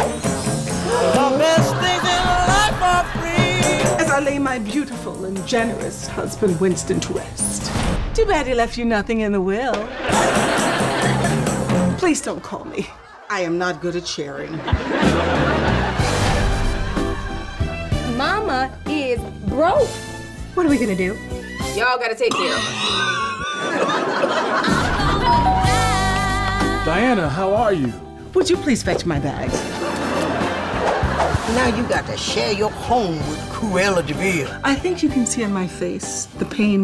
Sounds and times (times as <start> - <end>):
Music: 0.0 - 13.0, 13.8 - 36.8.